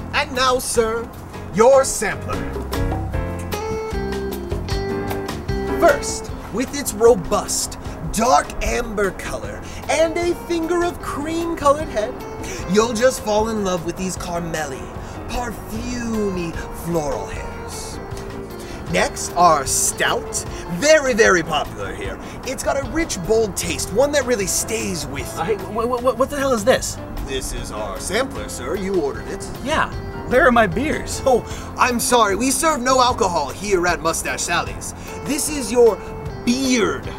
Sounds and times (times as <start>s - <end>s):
Music: 0.0s - 37.1s
Speech: 0.1s - 2.4s, 5.8s - 12.1s, 18.9s - 37.1s.